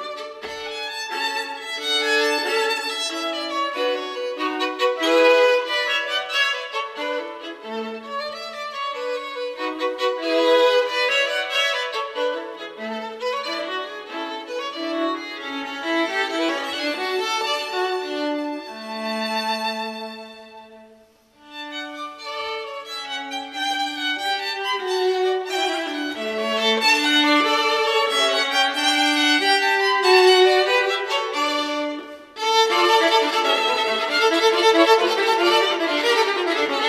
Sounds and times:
Violin, fiddle: 0.0 - 36.8.

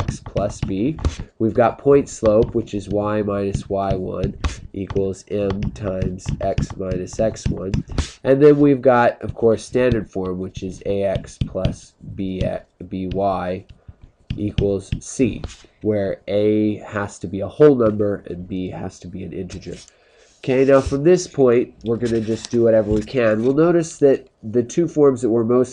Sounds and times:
Speech: 0.0 - 13.7, 14.3 - 25.7.

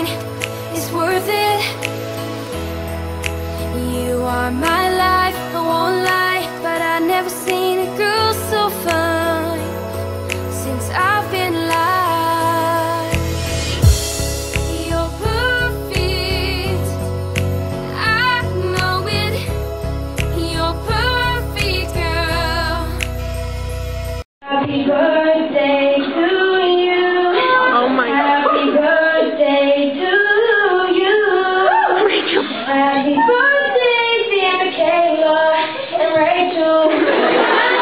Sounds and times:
Female singing: 0.0 - 1.9, 3.7 - 9.8, 10.4 - 13.3, 14.6 - 17.0, 17.9 - 19.5, 20.3 - 23.0, 24.5 - 31.8, 32.7 - 37.1
Music: 0.0 - 24.3.

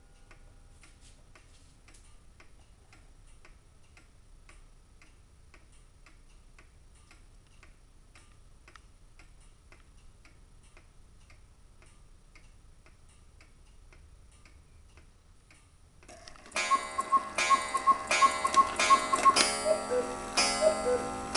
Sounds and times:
Tick-tock: 0.2 - 21.3
Tick: 0.3 - 15.7.

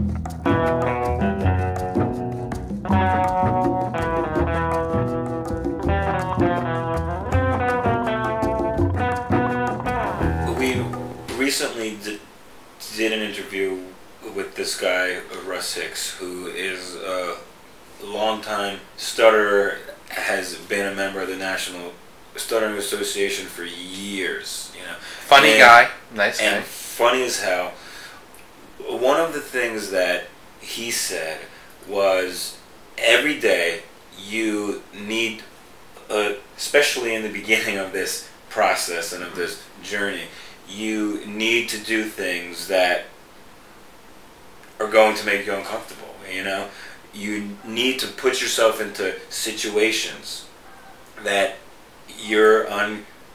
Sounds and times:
Speech: 10.5 - 27.8, 28.8 - 43.1, 44.8 - 50.5, 51.2 - 53.1.

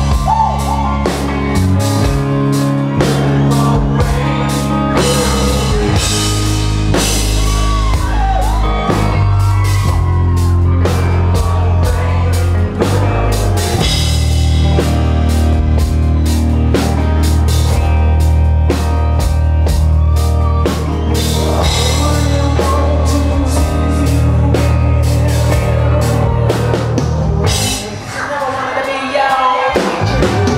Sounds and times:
Music: 0.0 - 30.5.

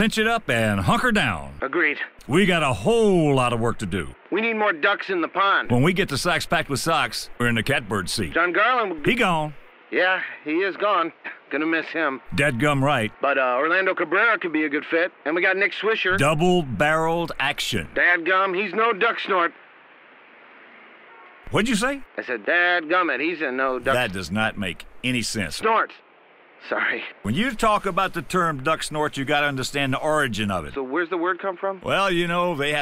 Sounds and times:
Speech: 0.0 - 19.6, 21.5 - 26.0, 26.6 - 32.8.

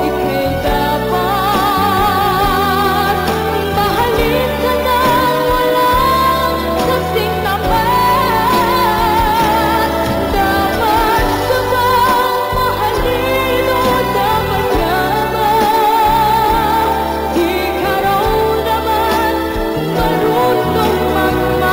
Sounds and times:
Music: 0.0 - 21.7.

